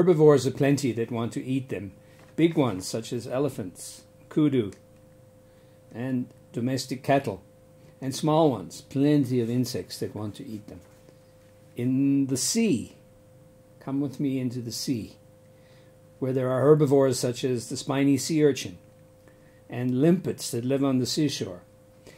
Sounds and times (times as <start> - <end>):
Speech: 0.0 - 4.8, 5.9 - 7.4, 8.0 - 10.9, 11.8 - 13.0, 13.8 - 15.2, 16.2 - 18.8, 19.7 - 21.7.